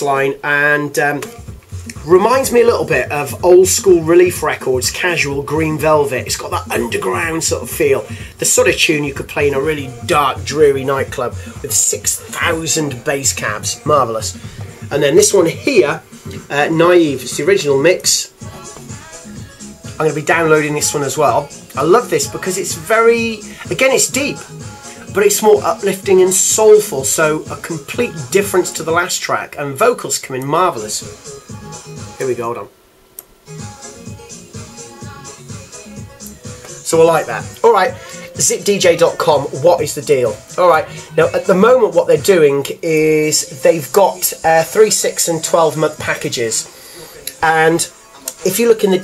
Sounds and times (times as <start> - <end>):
Speech: 0.0 - 18.4, 20.0 - 24.4, 25.1 - 31.1, 32.2 - 32.7, 36.8 - 46.7, 47.3 - 49.0
Background music: 0.0 - 49.0.